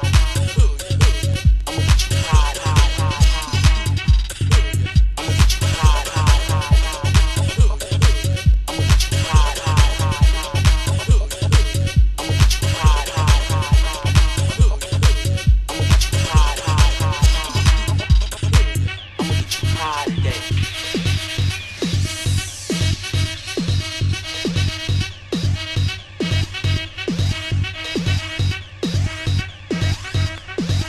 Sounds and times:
House music: 0:00.0 - 0:30.8.

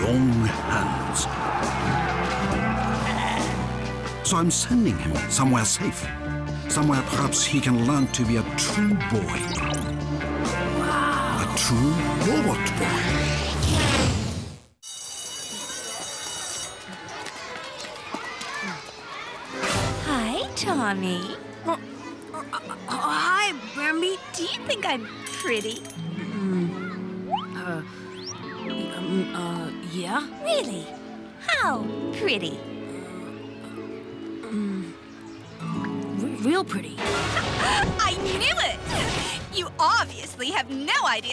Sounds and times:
Music: 0:00.0 - 0:16.7, 0:19.4 - 0:41.3.

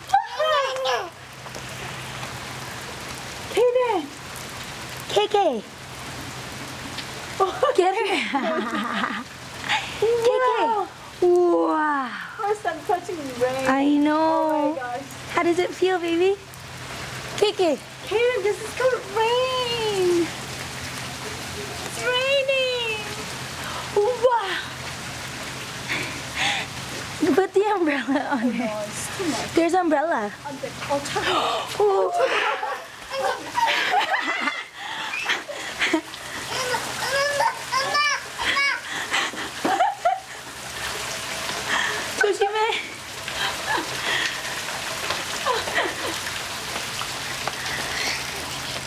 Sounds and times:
Child speech, kid speaking: 0:00.4 - 0:01.1, 0:10.2 - 0:10.9, 0:36.5 - 0:38.2.

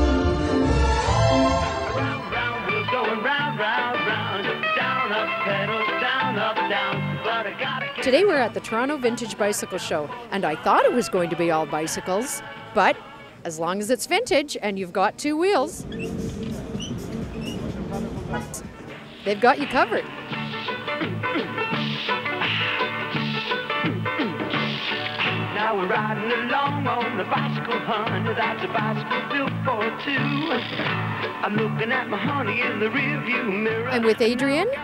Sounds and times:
Music: 0:00.0 - 0:13.4, 0:15.8 - 0:34.8
Speech: 0:08.0 - 0:15.8, 0:19.3 - 0:20.1, 0:33.9 - 0:34.8.

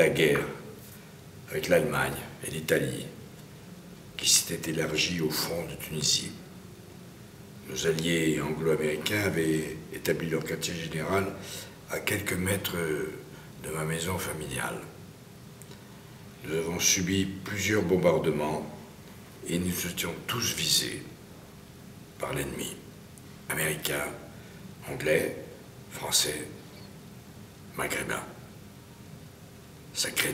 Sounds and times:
Speech: 0:00.0 - 0:00.8, 0:01.5 - 0:03.2, 0:04.2 - 0:06.4, 0:07.6 - 0:15.0, 0:16.4 - 0:21.2, 0:22.2 - 0:22.9, 0:23.5 - 0:26.6, 0:27.7 - 0:28.5, 0:29.9 - 0:30.3.

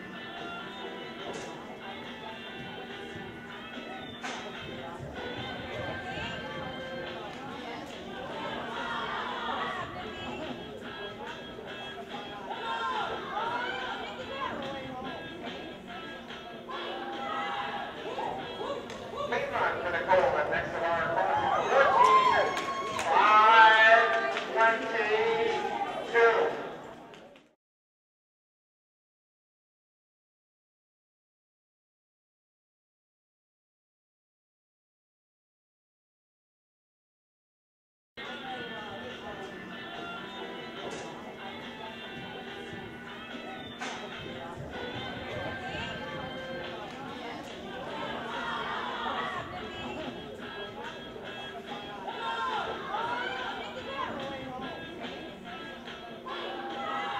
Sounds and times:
Music: 0:00.0 - 0:27.6, 0:38.2 - 0:57.1
Speech: 0:01.2 - 0:22.5, 0:23.1 - 0:27.3, 0:38.2 - 0:57.1.

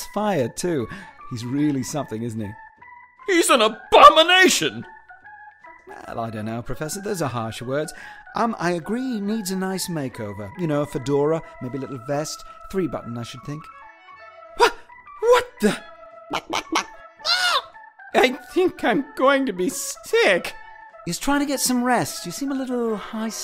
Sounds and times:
Music: 0:00.0 - 0:23.4
Speech: 0:00.1 - 0:02.6, 0:03.3 - 0:04.9, 0:18.2 - 0:20.5, 0:21.1 - 0:23.4.

